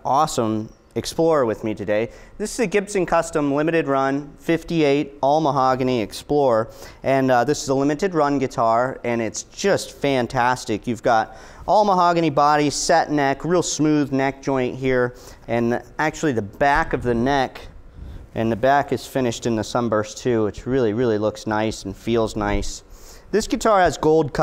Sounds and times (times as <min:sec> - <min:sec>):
Speech: 0:00.0 - 0:17.7, 0:18.4 - 0:24.4.